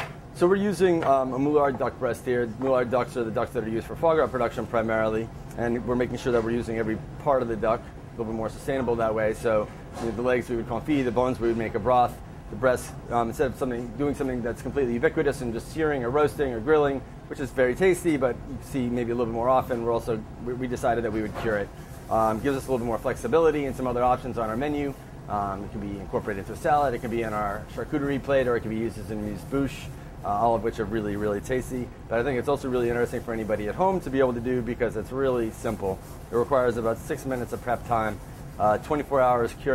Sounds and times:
Speech: 0.4s - 39.7s.

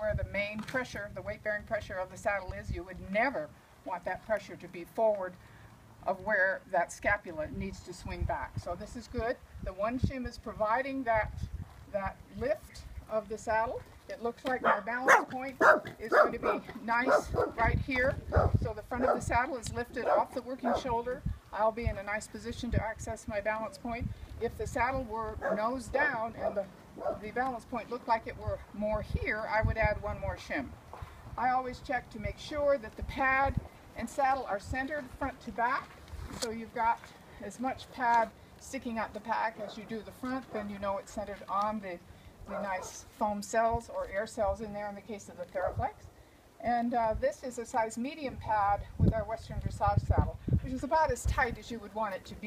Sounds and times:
Speech: 0.0s - 5.4s, 6.1s - 30.7s, 31.4s - 46.0s, 46.6s - 52.4s
Bark: 14.6s - 17.5s.

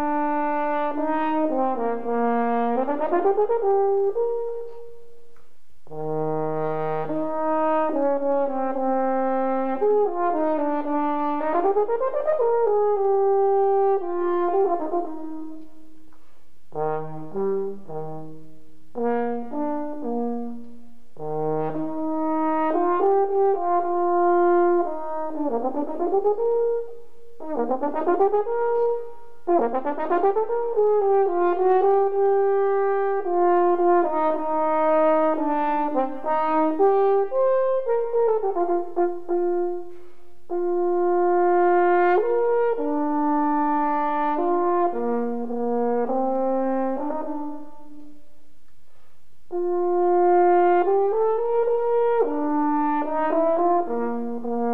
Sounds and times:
French horn: 0.0s - 54.7s.

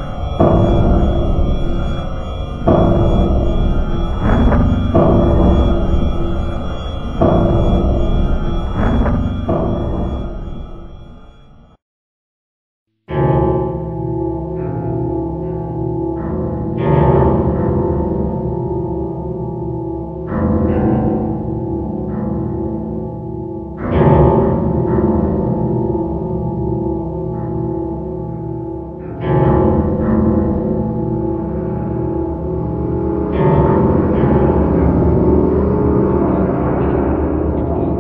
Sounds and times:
Scary music: 0.0s - 11.8s, 13.1s - 38.0s.

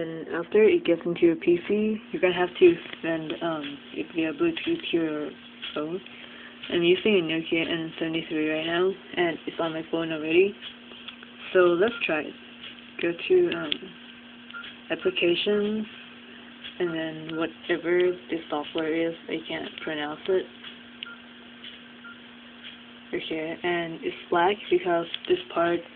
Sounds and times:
Speech: 0.0s - 6.1s, 6.7s - 10.6s, 11.5s - 12.4s, 13.0s - 14.0s, 14.9s - 15.9s, 16.8s - 20.5s, 23.1s - 25.9s.

